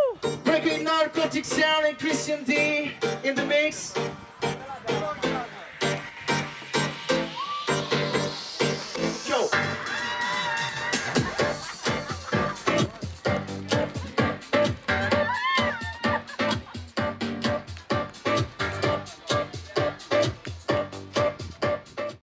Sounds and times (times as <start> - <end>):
Music: 0.0 - 22.2.